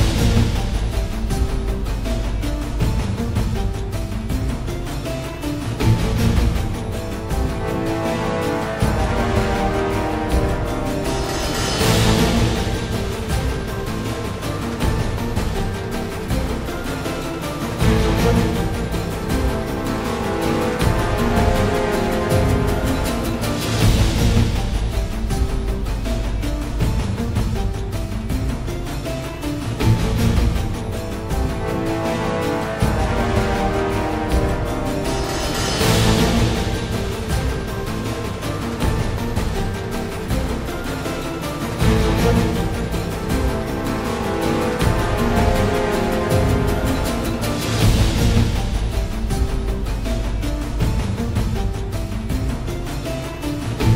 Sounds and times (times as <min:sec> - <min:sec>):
Soundtrack music: 0:00.0 - 0:53.9.